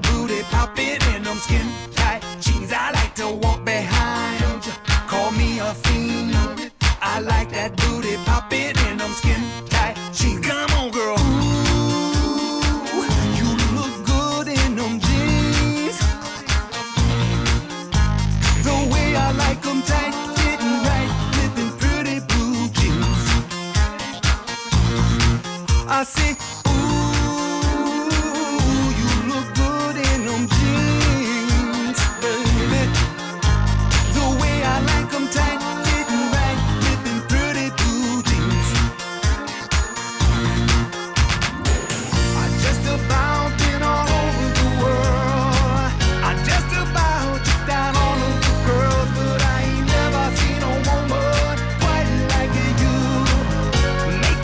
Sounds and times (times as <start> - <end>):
Soul music: 0.0 - 54.4
Progressive rock: 7.8 - 54.4.